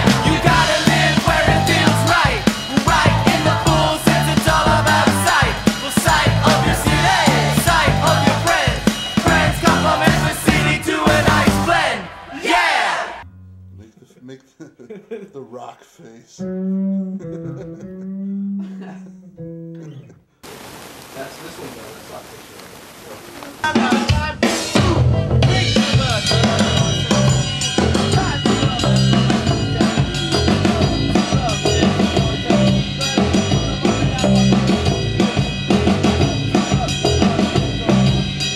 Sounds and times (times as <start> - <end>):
Punk rock: 0.0 - 13.2, 23.7 - 38.5
Speech: 13.8 - 16.5, 21.2 - 26.4.